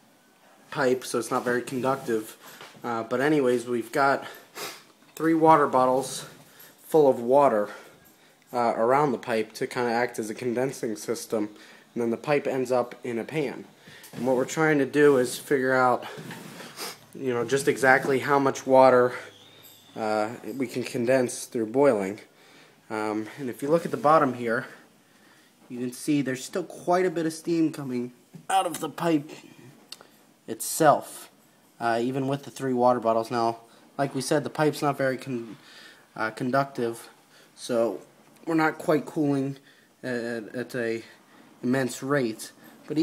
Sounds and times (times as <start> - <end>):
Speech: 0.7 - 4.4, 5.2 - 7.8, 8.5 - 16.2, 17.2 - 19.3, 20.0 - 22.3, 22.9 - 24.8, 25.7 - 29.5, 30.5 - 35.6, 36.2 - 43.0.